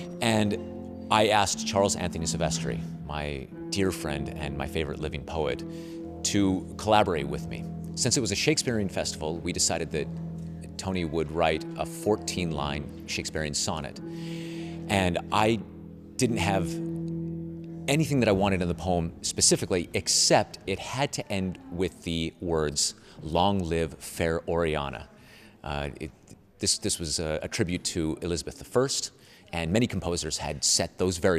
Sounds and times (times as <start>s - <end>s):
Speech: 0.2s - 5.6s, 6.2s - 10.1s, 10.7s - 14.0s, 14.9s - 15.6s, 16.2s - 16.8s, 17.9s - 31.3s.